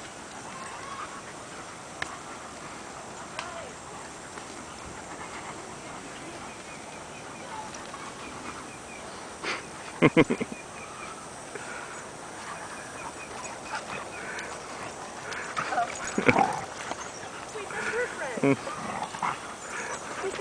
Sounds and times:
Oink: 18.4s - 19.4s.

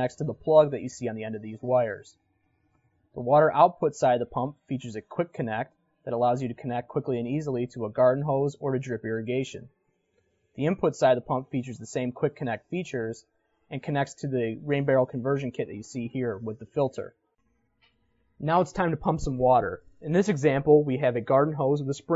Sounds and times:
Speech: 0.0s - 2.2s, 3.2s - 9.7s, 10.6s - 17.2s, 18.4s - 22.1s.

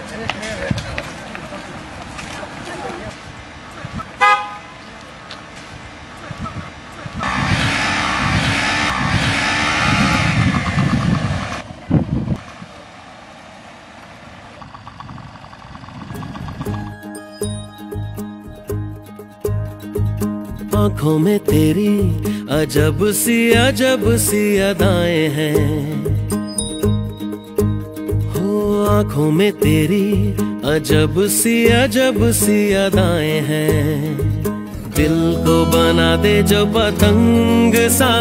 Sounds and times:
Speech: 0.0s - 4.0s
Vehicle horn, car horn, honking: 4.2s - 4.8s.

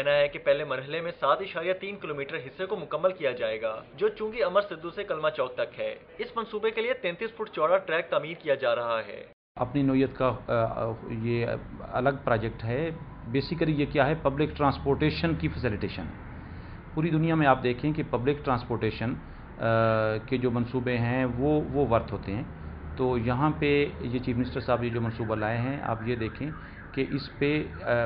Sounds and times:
Speech: 0.0s - 16.1s, 17.0s - 28.0s.

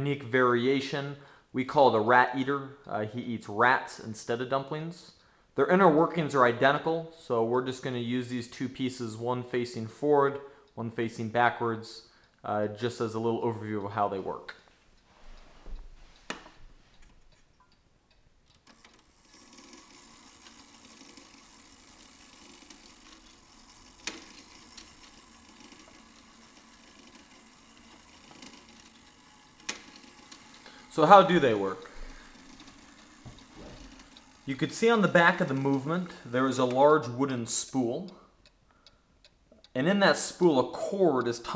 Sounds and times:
Speech: 0.0s - 14.6s, 30.9s - 31.9s, 34.5s - 38.2s, 39.8s - 41.5s.

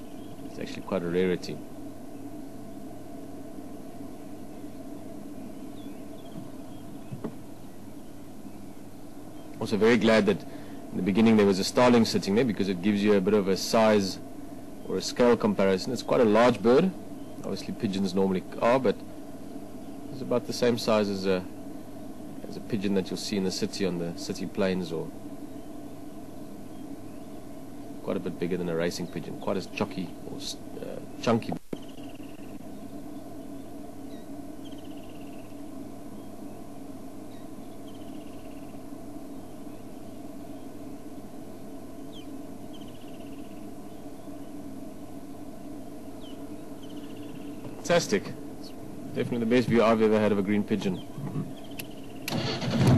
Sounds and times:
Bird: 0.0s - 2.9s, 4.1s - 12.4s, 13.0s - 19.0s, 19.7s - 40.9s, 42.0s - 52.3s
Speech: 0.5s - 1.6s, 9.6s - 14.2s, 14.9s - 19.0s, 20.2s - 21.5s, 22.4s - 25.1s, 28.0s - 31.6s, 47.8s - 51.5s.

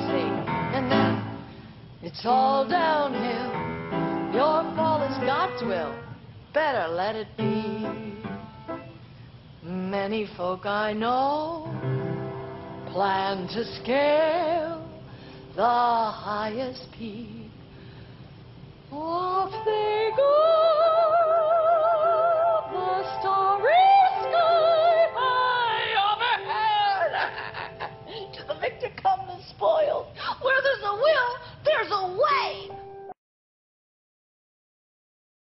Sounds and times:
Music: 0.0s - 6.4s, 7.2s - 9.2s, 11.5s - 15.6s, 18.9s - 29.3s, 32.4s - 33.2s
Speech: 28.4s - 32.7s.

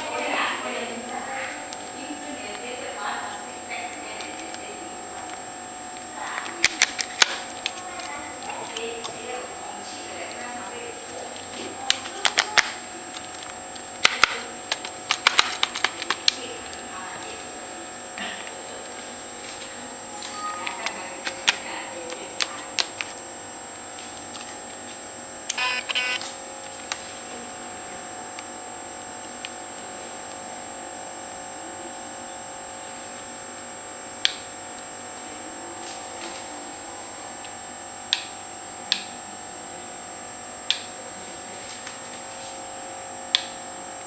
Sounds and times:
Inside, small room: 0.0s - 44.0s.

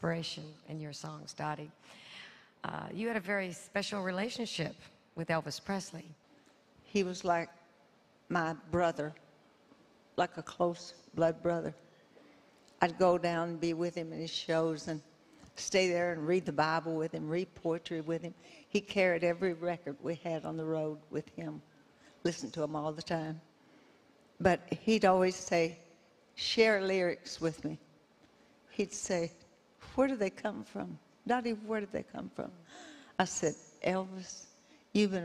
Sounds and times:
Speech: 0.0s - 1.8s, 2.6s - 6.2s, 6.9s - 7.5s, 8.3s - 9.2s, 10.2s - 11.8s, 12.8s - 15.0s, 15.6s - 21.6s, 22.2s - 23.4s, 24.4s - 25.8s, 26.4s - 27.8s, 28.7s - 32.6s, 33.2s - 35.2s.

